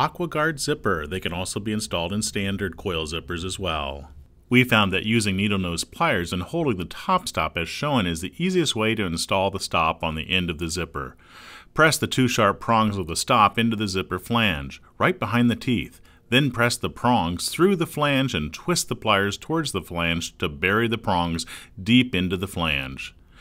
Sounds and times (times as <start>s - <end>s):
Speech: 0.0s - 11.2s, 11.8s - 23.2s.